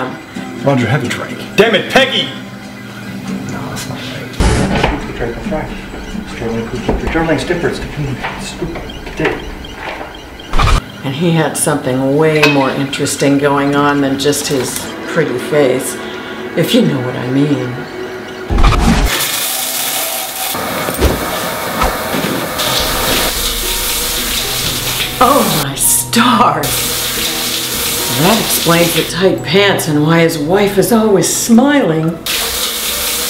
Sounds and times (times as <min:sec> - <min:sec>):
Music: 0:00.0 - 0:33.3
Speech: 0:11.0 - 0:16.0, 0:28.1 - 0:32.2.